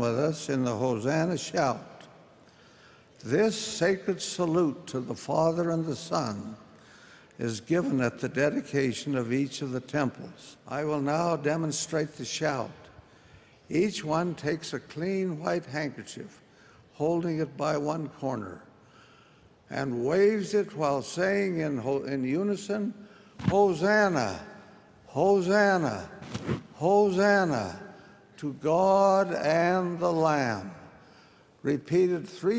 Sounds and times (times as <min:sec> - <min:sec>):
Speech: 0:00.0 - 0:02.1, 0:03.2 - 0:06.6, 0:07.4 - 0:12.9, 0:13.7 - 0:18.7, 0:19.7 - 0:30.9, 0:31.6 - 0:32.5.